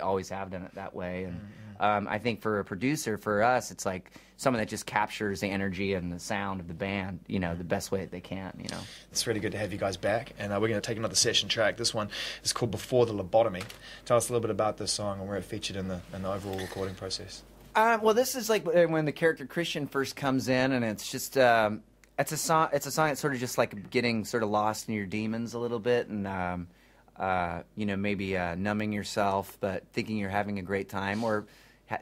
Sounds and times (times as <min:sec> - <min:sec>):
Speech: 0:00.0 - 0:32.0.